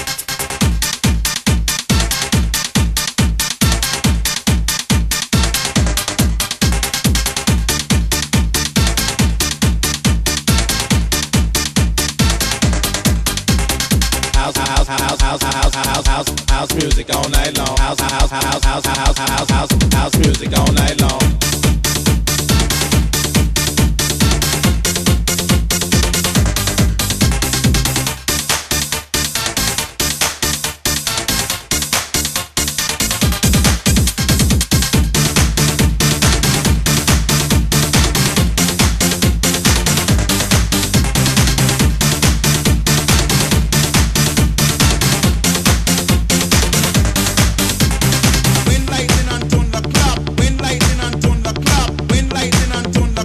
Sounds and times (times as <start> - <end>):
Dance music: 0.0 - 53.2.